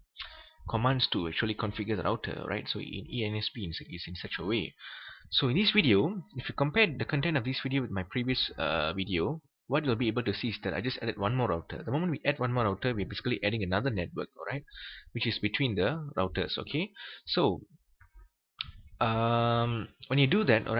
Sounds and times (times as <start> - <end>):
Speech: 0.2 - 17.7, 19.0 - 20.7.